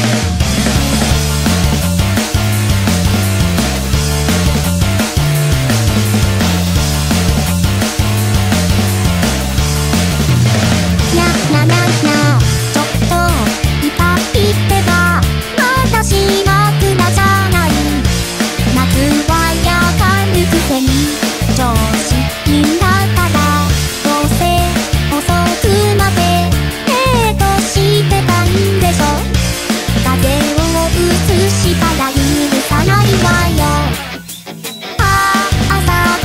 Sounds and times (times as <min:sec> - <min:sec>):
Music: 0:00.0 - 0:36.2.